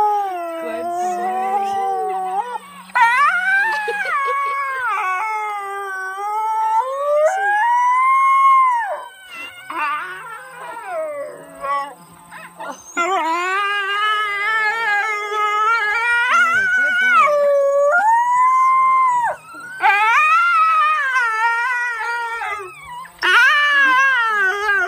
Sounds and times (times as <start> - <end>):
Howl: 0.0 - 24.8
Speech: 0.3 - 2.5, 16.1 - 17.8.